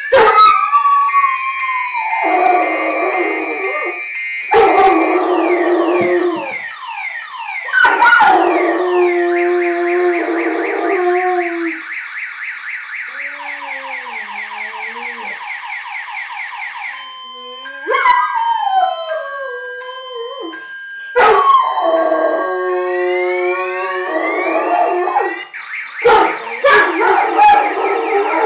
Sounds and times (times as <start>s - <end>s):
Whimper (dog): 13.1s - 15.4s.